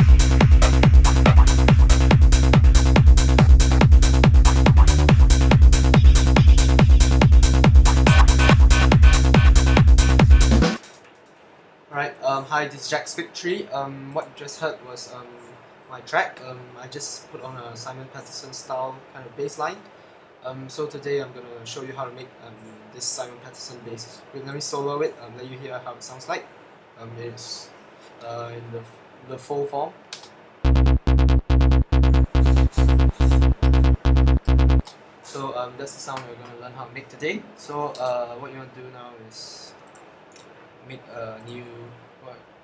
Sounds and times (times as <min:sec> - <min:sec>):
Trance music: 0:00.0 - 0:10.9, 0:30.7 - 0:34.8.